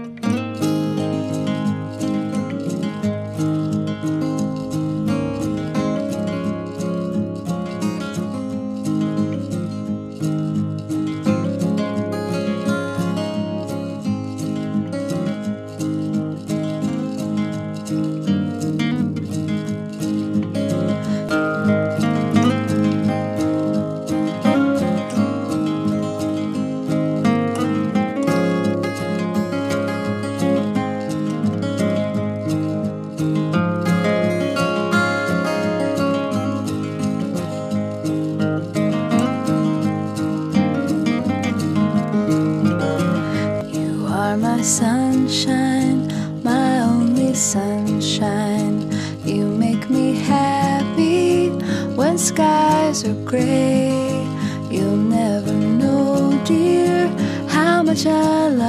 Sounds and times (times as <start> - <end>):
Music: 0.0 - 58.6.